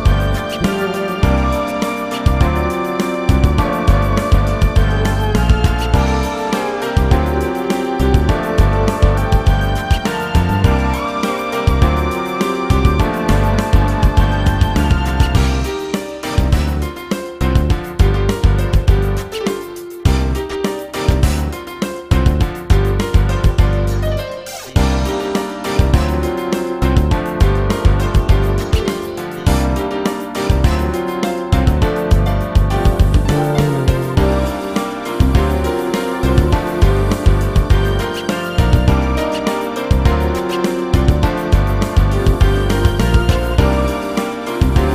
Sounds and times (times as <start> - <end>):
Music: 0.0 - 44.9.